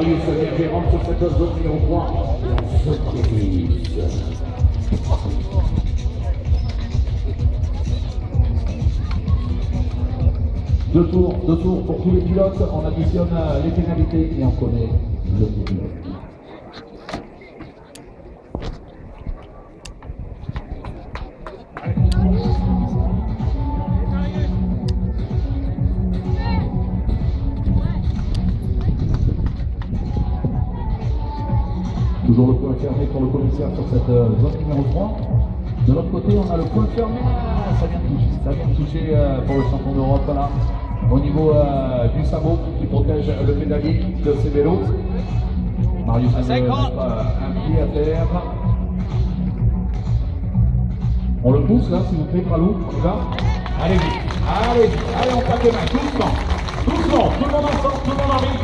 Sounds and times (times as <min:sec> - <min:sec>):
Music: 0:00.0 - 0:15.8, 0:21.8 - 0:58.6.